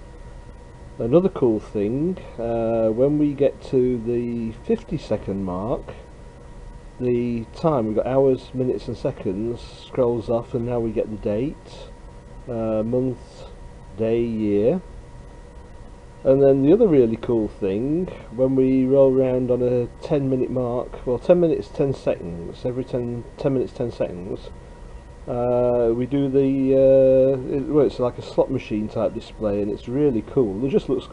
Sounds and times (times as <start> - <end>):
Speech: 1.0 - 6.1, 7.0 - 14.9, 16.2 - 24.6, 25.3 - 31.1.